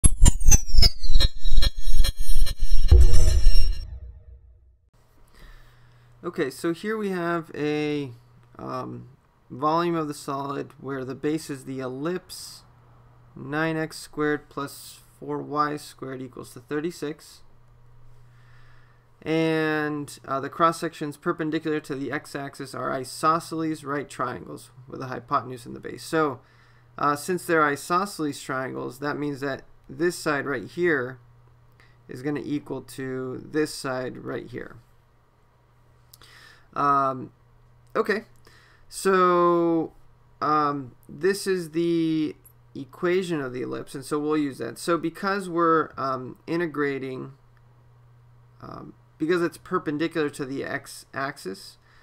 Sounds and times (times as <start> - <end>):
Music: 0.0 - 4.7
Speech: 6.2 - 12.7, 13.4 - 17.5, 19.2 - 26.4, 27.0 - 31.2, 32.1 - 34.8, 36.8 - 47.4, 48.6 - 51.8.